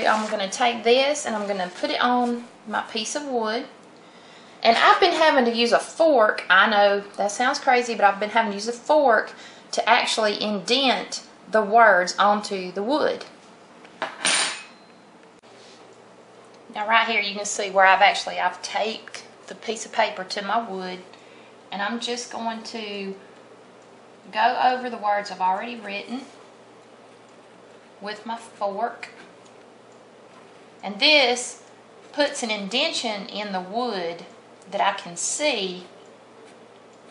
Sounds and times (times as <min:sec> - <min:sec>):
Cutlery, silverware: 0:14.0 - 0:14.9.